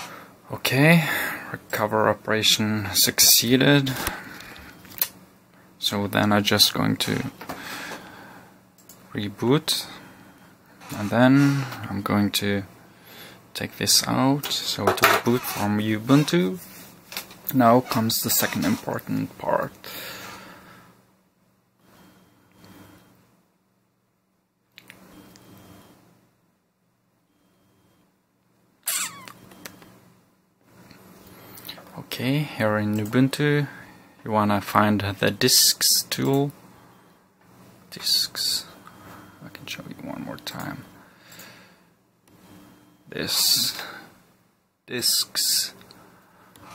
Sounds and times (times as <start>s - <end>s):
Speech: 0.5s - 4.0s, 5.8s - 7.4s, 9.1s - 10.0s, 10.9s - 12.7s, 13.6s - 16.6s, 17.5s - 19.8s, 31.9s - 36.6s, 37.9s - 38.7s, 39.4s - 40.8s, 43.1s - 43.9s, 44.9s - 45.8s.